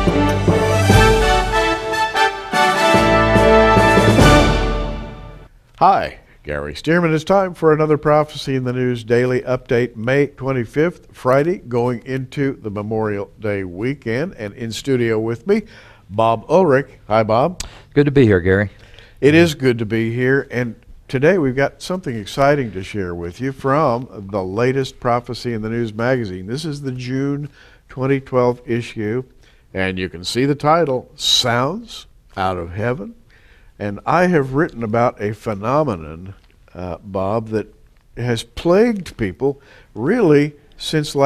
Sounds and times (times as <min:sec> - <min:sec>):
Speech: 0:05.8 - 0:33.2, 0:33.8 - 0:41.2.